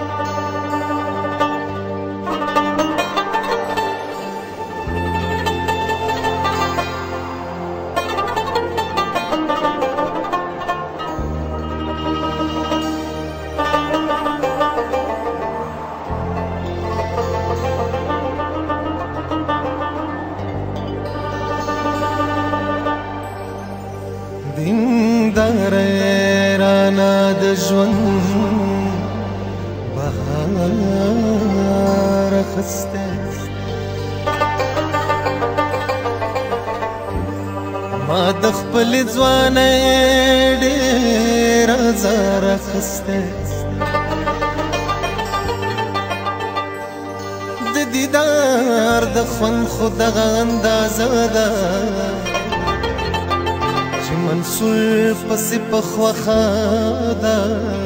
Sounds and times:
Traditional music: 0.0 - 57.8.

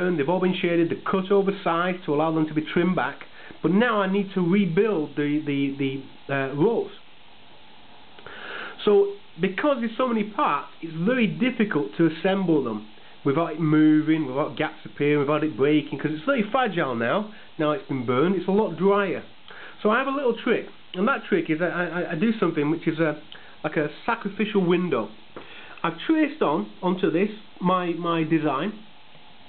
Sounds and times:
Speech: 0.0 - 7.1, 8.8 - 25.2, 25.8 - 28.9
Inside, small room: 0.0 - 29.4.

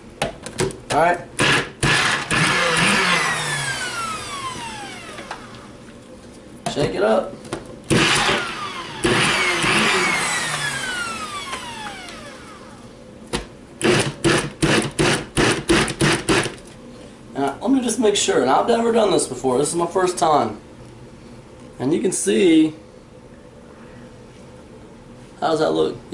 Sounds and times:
Blender: 1.4 - 5.5, 7.9 - 12.8, 13.8 - 16.5.

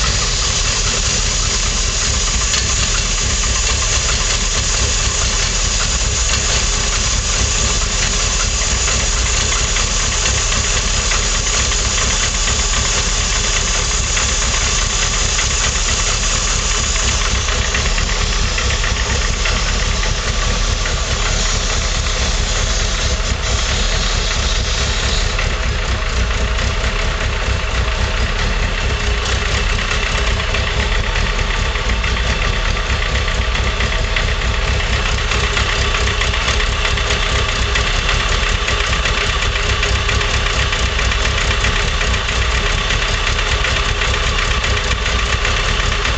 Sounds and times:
Idling: 0.0 - 46.1
Vehicle: 0.0 - 46.1.

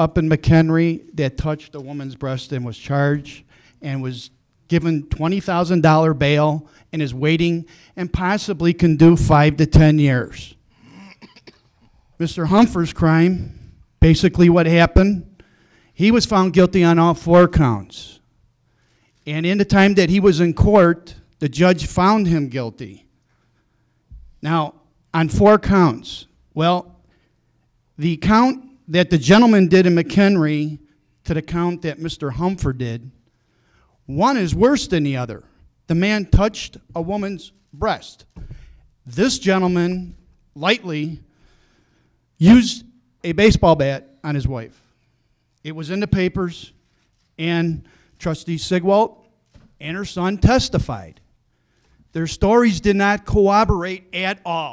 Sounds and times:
Speech: 0.0 - 10.6, 12.2 - 15.3, 16.0 - 18.2, 19.3 - 23.1, 24.4 - 26.9, 28.0 - 33.2, 34.1 - 38.3, 39.1 - 41.2, 42.4 - 44.8, 45.7 - 46.8, 47.4 - 49.2, 49.8 - 51.2, 52.2 - 54.7.

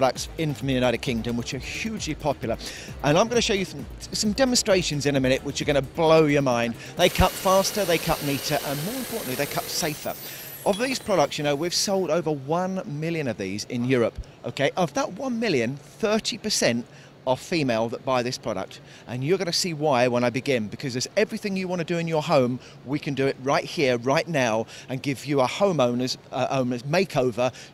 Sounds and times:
Music: 0.0 - 11.6
Speech: 0.0 - 27.6.

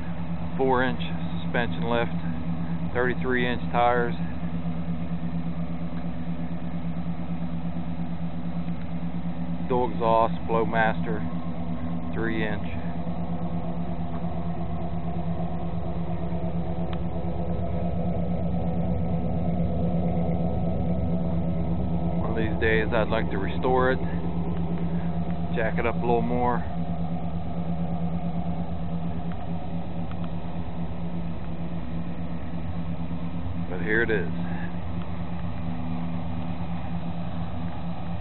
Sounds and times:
Truck: 0.0 - 38.2
Speech: 0.6 - 2.2, 2.9 - 4.3, 9.7 - 11.3, 12.2 - 12.9, 22.2 - 24.1, 25.5 - 26.7, 33.7 - 34.7.

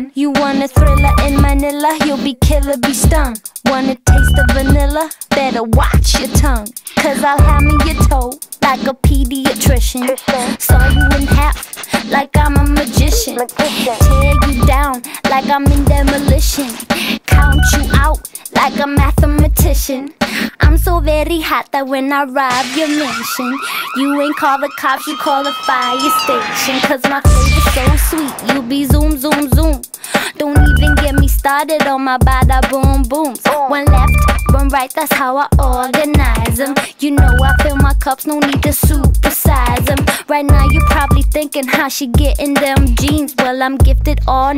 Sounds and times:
Exciting music: 10.0 - 14.8, 22.5 - 29.8.

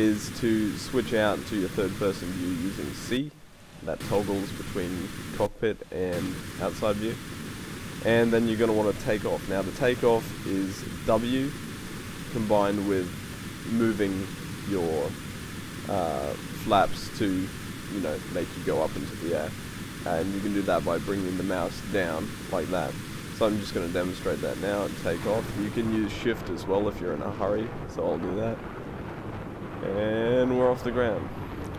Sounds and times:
Speech: 0.0 - 7.2, 8.0 - 11.6, 12.3 - 15.2, 15.9 - 28.6, 29.8 - 31.2.

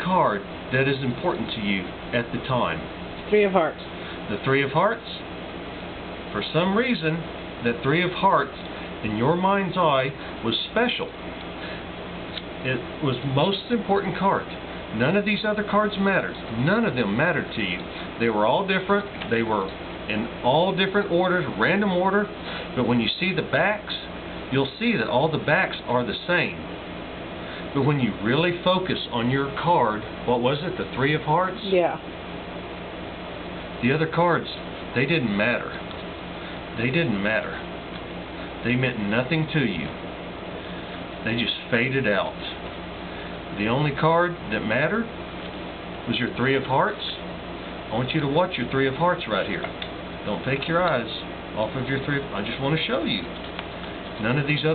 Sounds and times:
Speech: 0.0 - 5.3, 6.3 - 11.2, 12.6 - 26.7, 27.7 - 32.1, 33.8 - 35.8, 36.8 - 37.7, 38.6 - 40.0, 41.2 - 42.6, 43.5 - 45.2, 46.1 - 47.3, 47.9 - 53.4, 54.2 - 54.7.

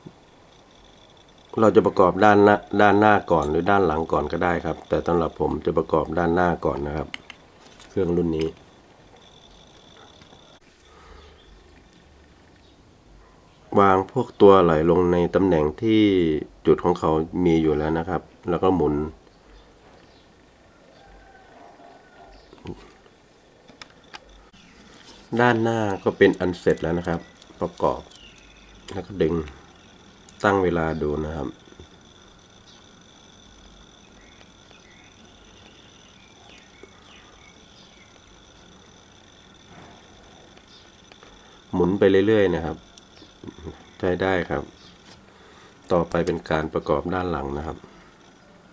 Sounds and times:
Speech: 1.6 - 7.1, 7.9 - 8.6, 13.7 - 19.2, 25.4 - 28.1, 28.9 - 29.6, 30.4 - 31.6, 41.8 - 42.8, 43.5 - 44.7, 45.9 - 47.9.

